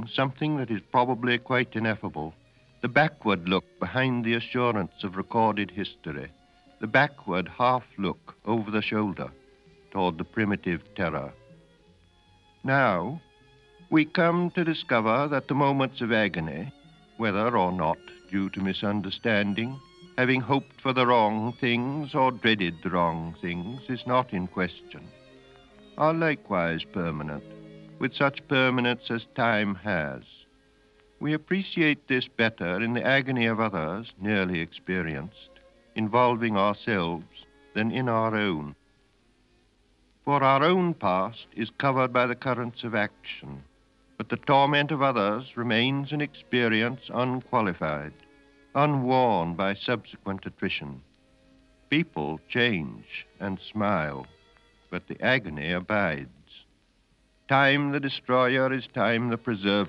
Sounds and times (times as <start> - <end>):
Speech: 0.0 - 9.3, 10.0 - 11.4, 12.6 - 13.2, 13.9 - 25.1, 26.0 - 27.4, 28.0 - 30.4, 31.2 - 38.8, 40.3 - 48.2, 48.8 - 51.0, 51.9 - 54.3, 54.9 - 56.7, 57.5 - 59.8
Music: 0.0 - 59.8.